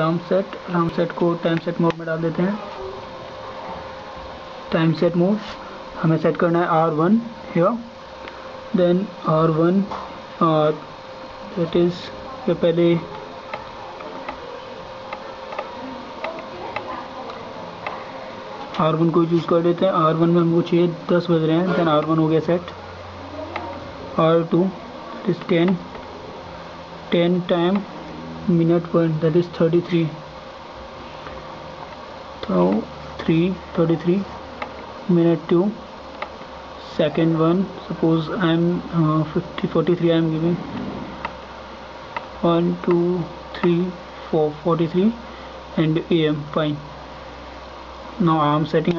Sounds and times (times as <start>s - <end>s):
Speech: 0.0s - 3.1s, 4.7s - 7.9s, 11.5s - 25.9s, 27.1s - 27.9s, 28.5s - 30.2s, 32.4s - 34.4s, 35.1s - 35.9s, 36.8s - 40.7s, 42.4s - 45.2s, 45.8s - 46.9s, 48.2s - 48.9s.